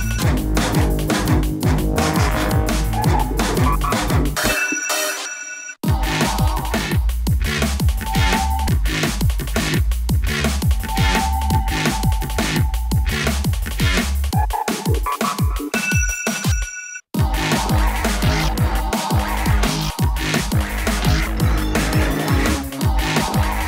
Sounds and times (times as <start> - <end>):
Techno: 0.0 - 4.6, 5.8 - 15.8, 17.2 - 23.6
Video game music: 0.0 - 5.0, 5.8 - 15.8, 17.2 - 23.6.